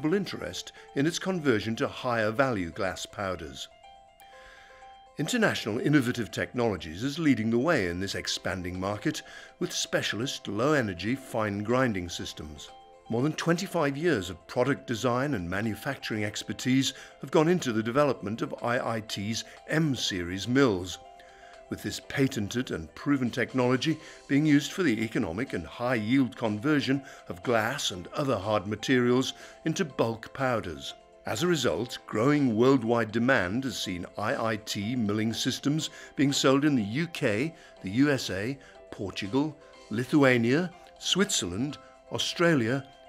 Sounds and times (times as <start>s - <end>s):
Speech: 0.0s - 3.7s, 5.2s - 21.0s, 21.7s - 42.9s
Music: 0.0s - 43.0s.